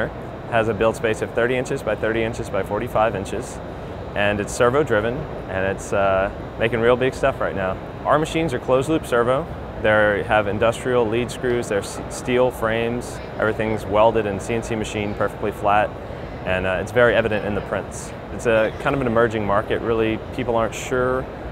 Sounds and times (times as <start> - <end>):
Speech: 0.0 - 3.6, 4.2 - 21.2.